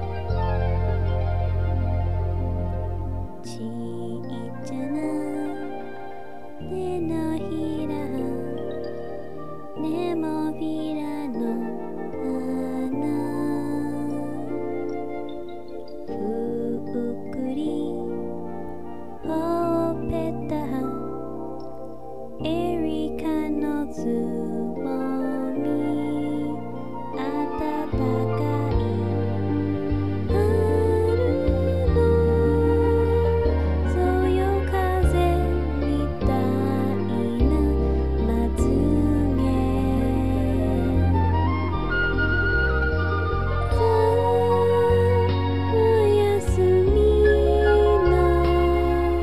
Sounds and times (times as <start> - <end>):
Lullaby: 0.0 - 49.2.